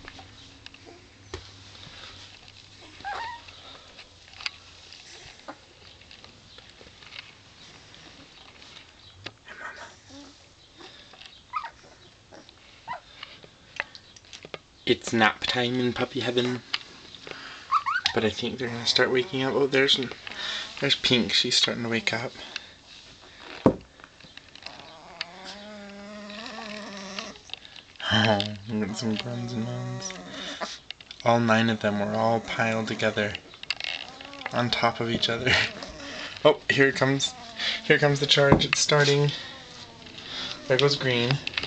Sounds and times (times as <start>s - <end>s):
Whimper (dog): 3.0s - 3.5s, 11.5s - 12.0s, 17.7s - 18.2s.